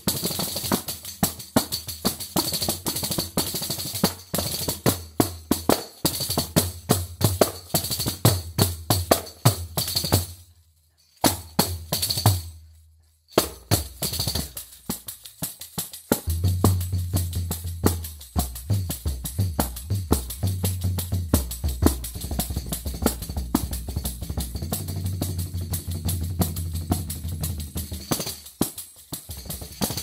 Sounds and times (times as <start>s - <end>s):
Tambourine: 0.0s - 30.0s
Drum: 13.4s - 30.0s.